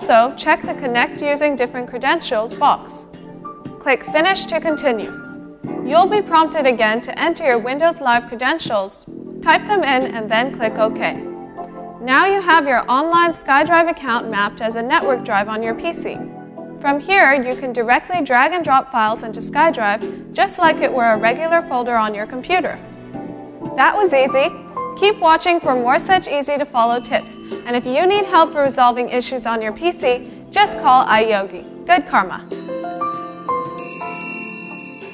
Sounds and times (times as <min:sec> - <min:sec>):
Speech: 0:05.9 - 0:11.2, 0:12.0 - 0:16.2, 0:16.8 - 0:22.8, 0:23.8 - 0:32.4
Wind chime: 0:26.9 - 0:28.0, 0:32.6 - 0:35.1.